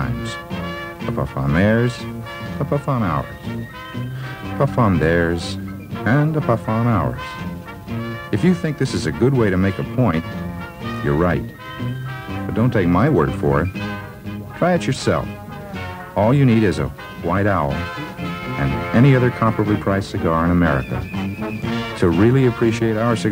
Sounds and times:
Speech: 0.0s - 0.4s, 1.0s - 3.4s, 4.5s - 7.4s, 8.3s - 10.3s, 11.0s - 11.6s, 12.5s - 13.8s, 14.6s - 15.4s, 16.2s - 21.1s, 22.0s - 23.3s
Music: 0.0s - 23.3s.

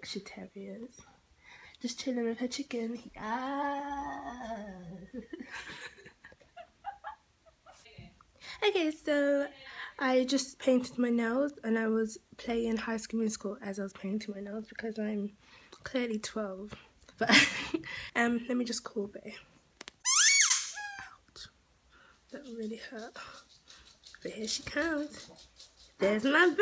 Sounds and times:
Inside, small room: 0.0s - 26.6s
Squeak: 20.0s - 21.2s
Speech: 22.3s - 23.4s, 24.2s - 25.3s, 26.0s - 26.6s.

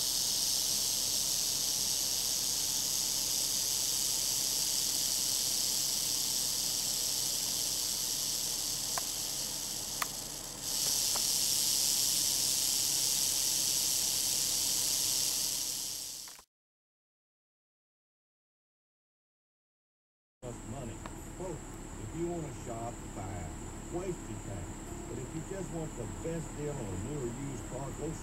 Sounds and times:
Snake: 0.0s - 16.5s, 20.5s - 28.2s.

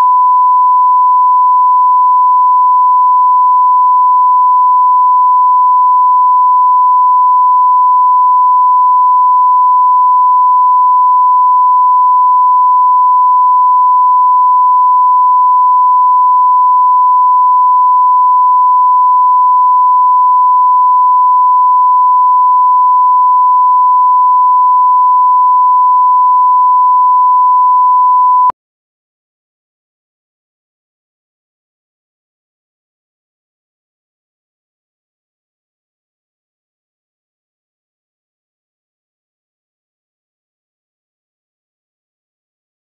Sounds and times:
Beep, bleep: 0.0s - 28.6s.

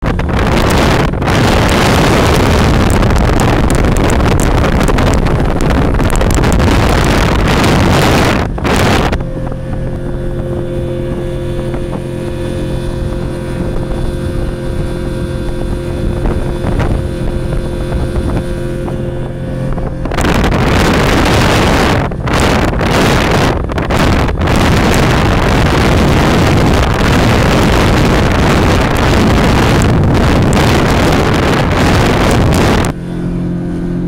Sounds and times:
Motorboat, speedboat: 0.0s - 34.0s.

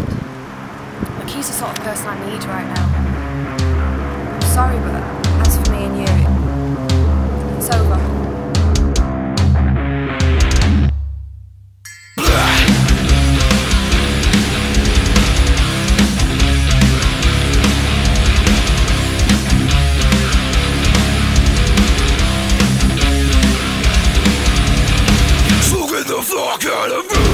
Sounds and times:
Exciting music: 2.2s - 10.9s, 12.2s - 25.9s, 27.1s - 27.3s.

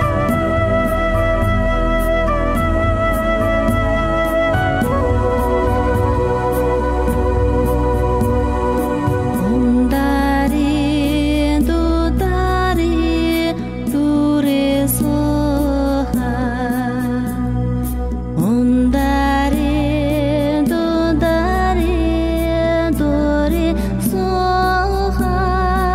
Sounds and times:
Music: 0.0s - 25.9s.

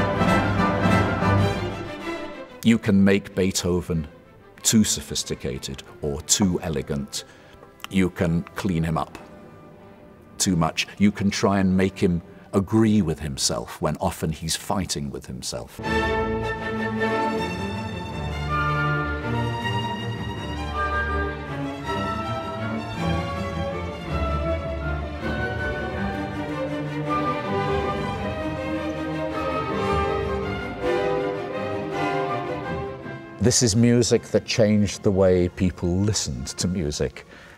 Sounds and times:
Speech: 2.6s - 7.3s, 7.9s - 9.2s, 10.4s - 15.8s, 33.4s - 37.3s.

